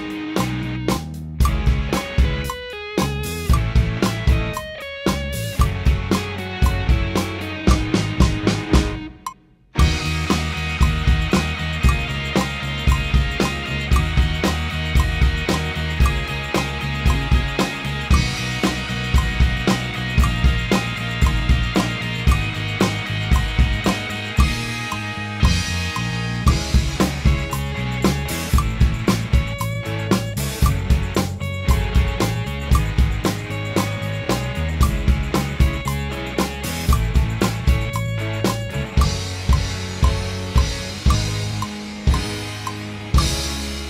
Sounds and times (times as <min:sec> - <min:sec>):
Drum: 0:00.0 - 0:43.8
Drum kit: 0:00.0 - 0:43.8.